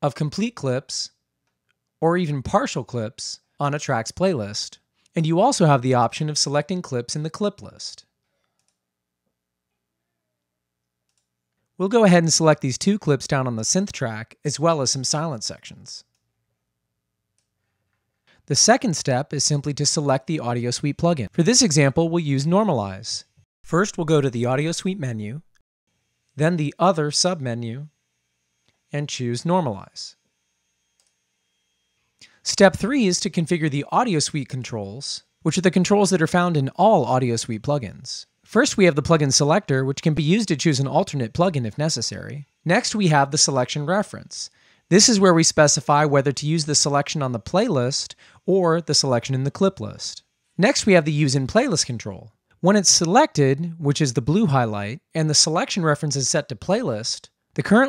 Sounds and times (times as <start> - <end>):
Speech: 0.0 - 1.2, 2.0 - 8.1, 11.8 - 16.1, 18.5 - 25.5, 26.4 - 27.9, 28.9 - 30.2, 32.4 - 57.8.